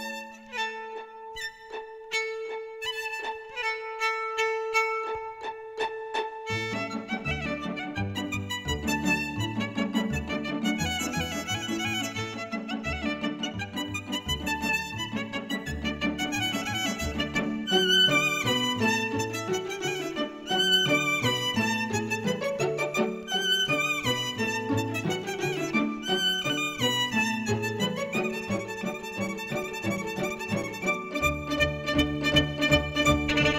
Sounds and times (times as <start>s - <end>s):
Violin, fiddle: 0.0s - 33.5s.